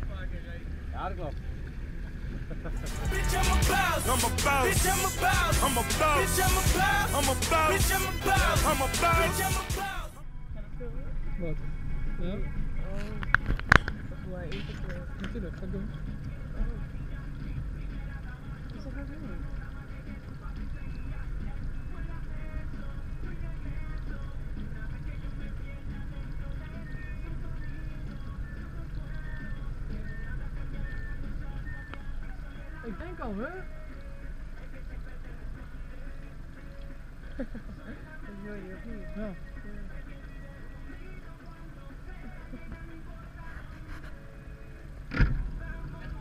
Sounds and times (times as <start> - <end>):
Boat, Water vehicle: 13.4 - 30.1.